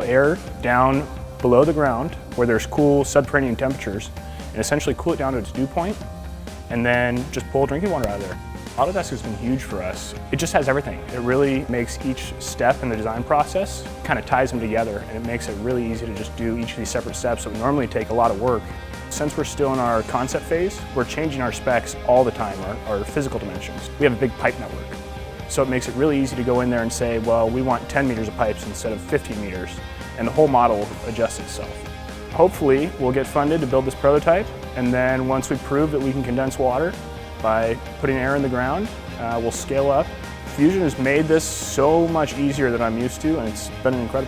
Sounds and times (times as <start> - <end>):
Speech: 0.0 - 6.0, 6.7 - 24.9, 25.5 - 44.2
Music: 0.0 - 44.2.